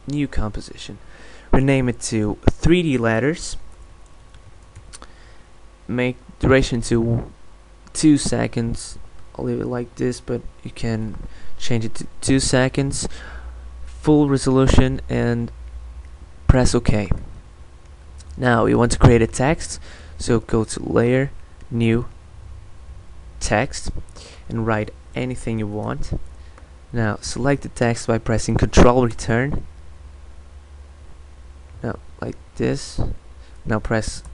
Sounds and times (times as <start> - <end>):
Speech: 0.0 - 3.6, 5.9 - 13.1, 14.0 - 15.6, 16.5 - 17.2, 18.3 - 22.1, 23.4 - 26.2, 26.9 - 29.7, 31.8 - 34.3.